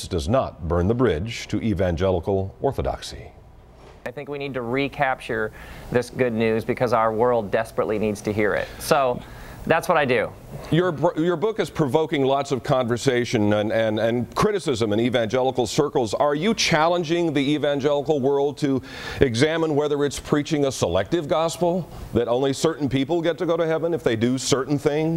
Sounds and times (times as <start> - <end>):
Speech: 0.0 - 3.4, 4.1 - 25.1.